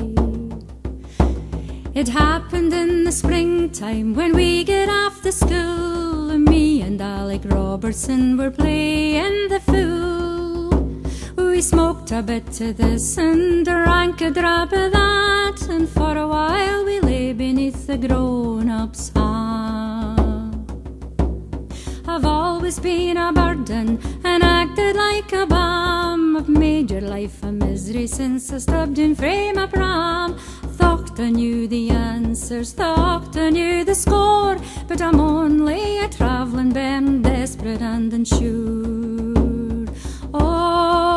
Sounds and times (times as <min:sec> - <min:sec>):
Female singing: 0:00.0 - 0:00.6, 0:02.0 - 0:10.8, 0:11.4 - 0:20.6, 0:22.1 - 0:41.1
Music: 0:00.0 - 0:41.1.